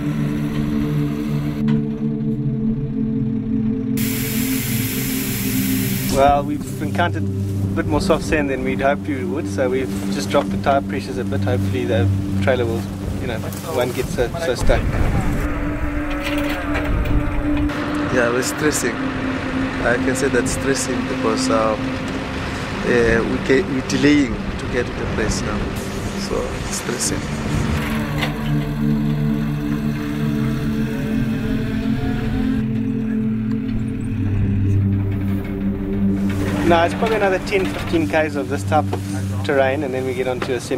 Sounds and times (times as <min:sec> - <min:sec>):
Music: 0:00.0 - 0:40.7
Outside, rural or natural: 0:00.0 - 0:40.7
Speech: 0:06.1 - 0:15.4, 0:18.1 - 0:19.0, 0:19.8 - 0:21.8, 0:22.8 - 0:27.3, 0:36.6 - 0:40.7.